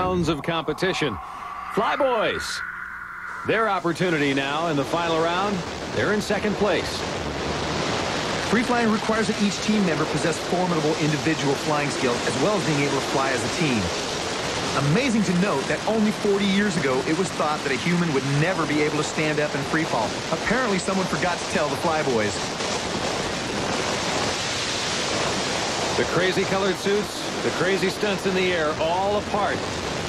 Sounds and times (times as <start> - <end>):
Speech: 0.0 - 2.6, 3.5 - 7.1, 8.5 - 13.9, 14.8 - 22.4, 26.0 - 29.6
Pink noise: 0.0 - 19.6.